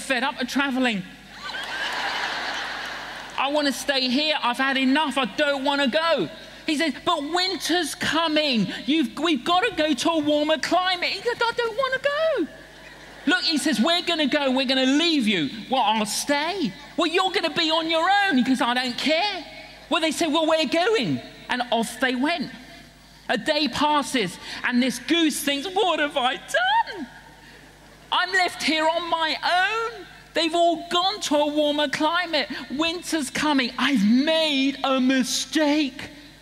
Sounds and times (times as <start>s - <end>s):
Speech: 0.0s - 1.2s, 3.4s - 12.6s, 13.2s - 22.7s, 23.3s - 27.1s, 28.1s - 36.2s.